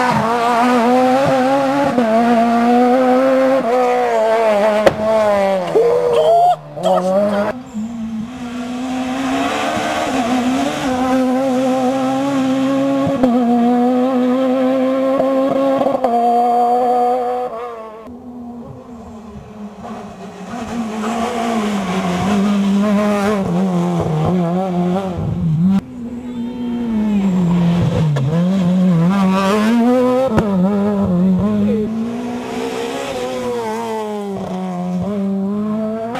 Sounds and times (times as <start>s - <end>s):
Car passing by: 3.0s - 14.5s, 18.6s - 25.7s, 31.7s - 36.1s.